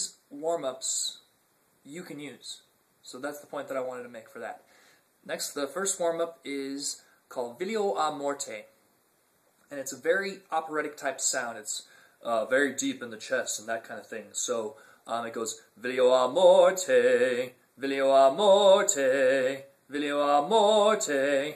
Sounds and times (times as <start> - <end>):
Speech: 0.0 - 4.7, 5.3 - 8.8, 9.7 - 16.9.